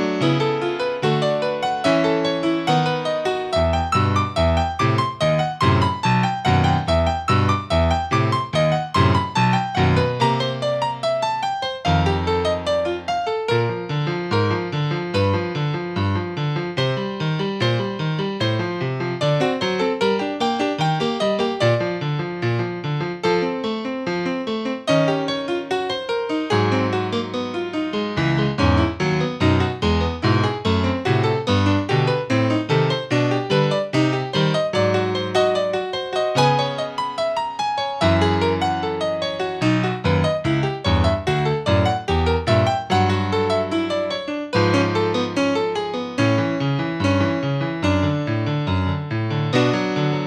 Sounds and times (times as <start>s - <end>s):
Music: 0.0s - 50.2s.